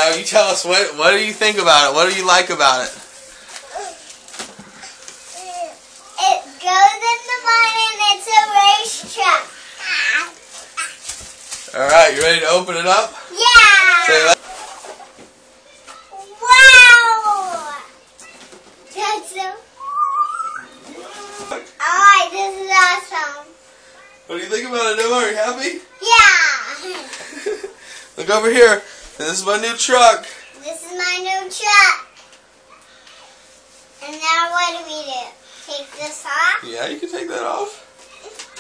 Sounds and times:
Inside, small room: 0:00.0 - 0:38.6.

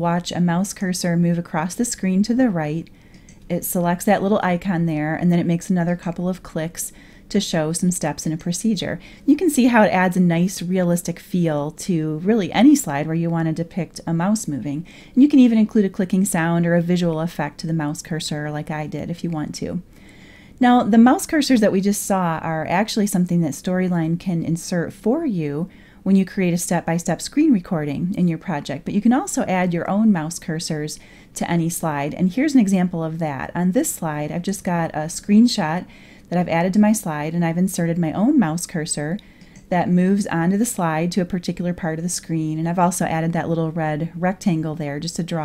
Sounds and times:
Speech: 0:00.0 - 0:02.9, 0:03.5 - 0:19.8, 0:20.6 - 0:45.4.

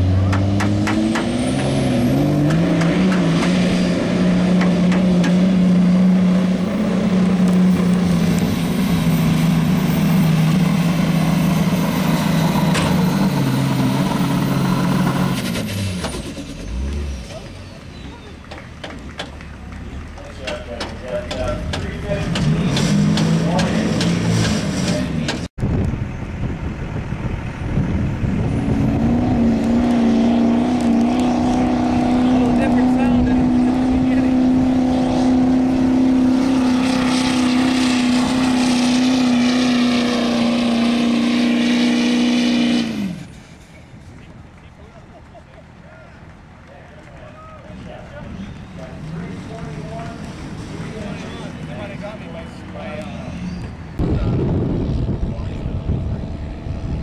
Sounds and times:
Car: 0:00.0 - 0:57.0
Truck: 0:00.0 - 0:57.0
Speech: 0:20.2 - 0:22.8, 0:31.5 - 0:34.5, 0:45.8 - 0:53.4, 0:55.2 - 0:56.3.

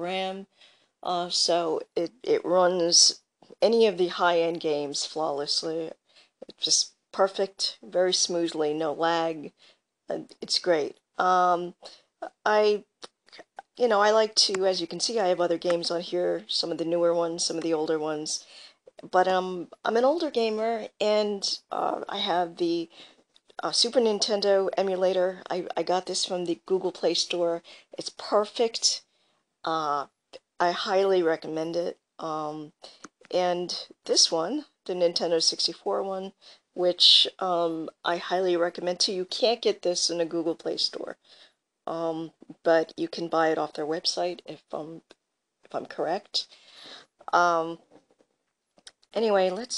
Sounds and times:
Speech: 0:00.0 - 0:23.0, 0:23.6 - 0:29.0, 0:29.7 - 0:41.2, 0:41.9 - 0:45.1, 0:45.7 - 0:46.6, 0:47.2 - 0:47.9, 0:48.9 - 0:49.7.

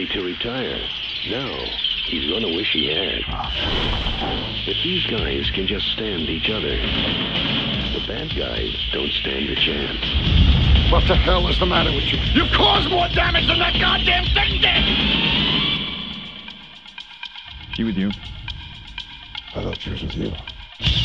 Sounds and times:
Speech: 0:00.0 - 0:03.7, 0:04.7 - 0:06.9, 0:07.9 - 0:10.0, 0:10.9 - 0:14.9, 0:17.7 - 0:18.2, 0:19.5 - 0:20.5
Music: 0:00.0 - 0:21.0.

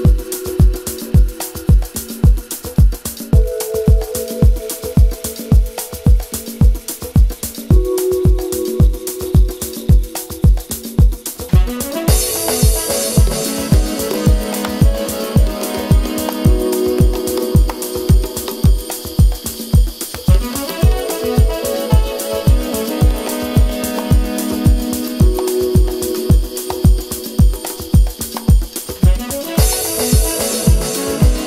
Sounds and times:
Music: 0:00.0 - 0:31.4.

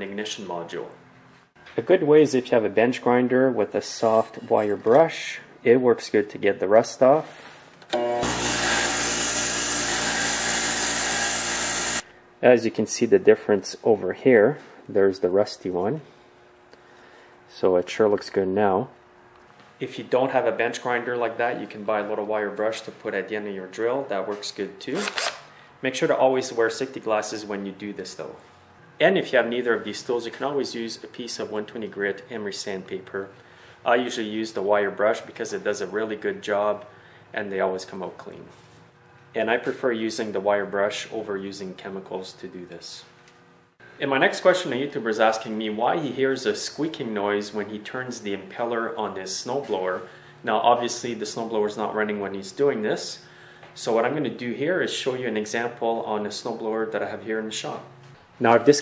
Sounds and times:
Power tool: 0:07.9 - 0:12.1, 0:25.0 - 0:25.5.

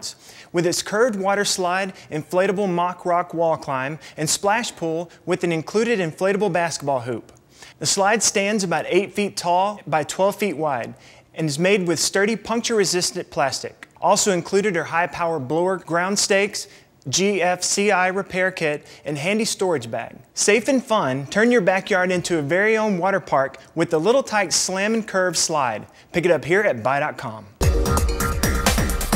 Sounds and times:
Speech: 0:00.0 - 0:27.6.

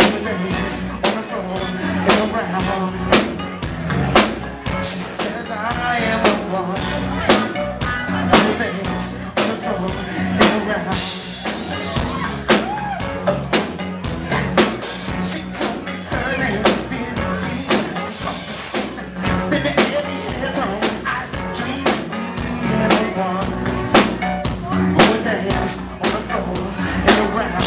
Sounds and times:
Music: 0:00.0 - 0:27.6.

